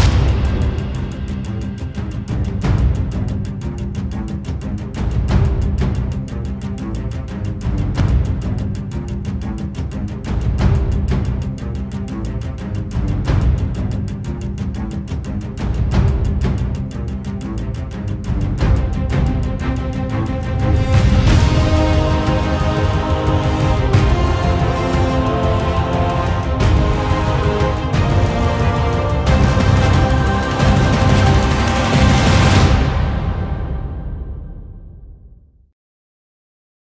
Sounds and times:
Music: 0.0 - 35.8.

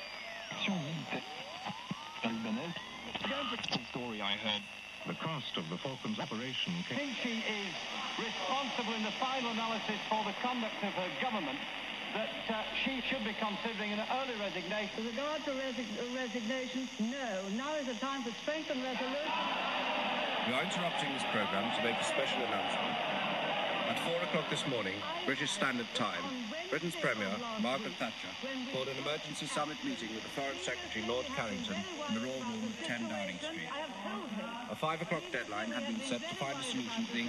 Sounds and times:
Speech: 2.2 - 19.3, 20.5 - 23.0, 23.9 - 37.2.

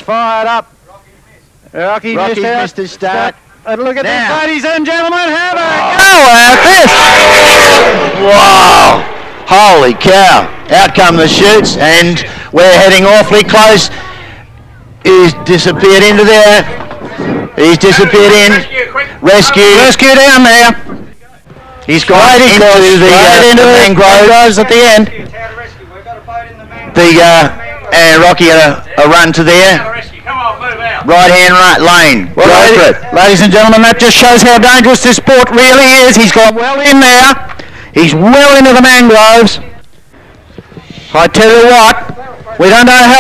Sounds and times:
Speech: 9.5 - 14.4, 15.0 - 39.8, 41.1 - 43.2.

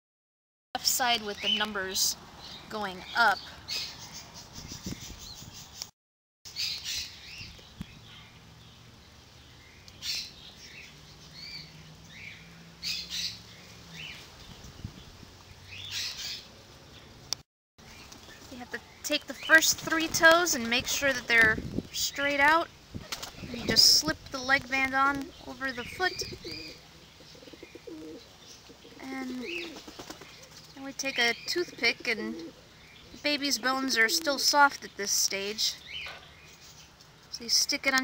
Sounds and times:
Speech: 0.8 - 3.5, 18.5 - 22.7, 23.5 - 26.4, 29.0 - 29.6, 30.8 - 32.4, 33.2 - 35.8, 37.3 - 38.0
Bird: 9.4 - 17.2, 24.8 - 37.5.

